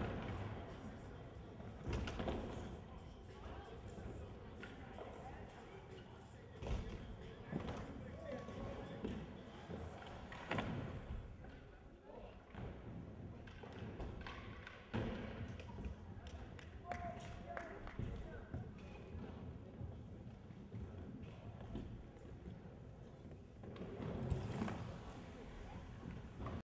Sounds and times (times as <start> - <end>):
Speech: 0.2 - 12.6, 15.4 - 22.4, 24.6 - 26.6.